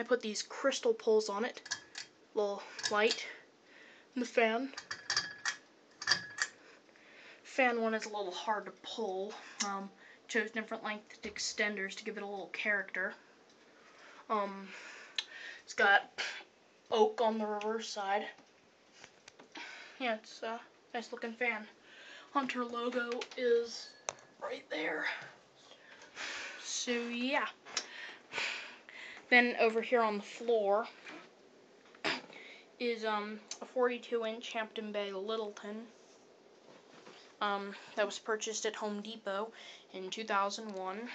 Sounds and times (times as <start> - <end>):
Speech: 0.0 - 1.6, 2.4 - 3.4, 4.2 - 4.8, 7.5 - 13.2, 14.3 - 14.7, 15.7 - 16.2, 16.9 - 18.4, 20.0 - 25.2, 26.6 - 27.6, 29.3 - 31.0, 32.8 - 35.9, 37.4 - 41.1.